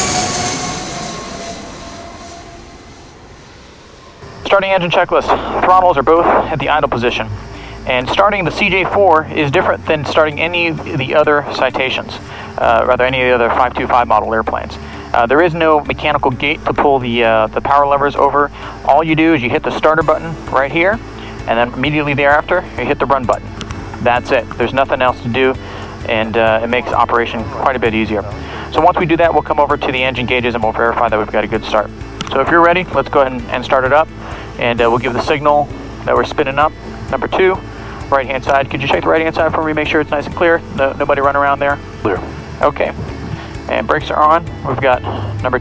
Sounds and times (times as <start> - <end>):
Music: 4.2 - 45.6
Speech: 4.4 - 23.4, 24.0 - 43.0, 43.7 - 45.6.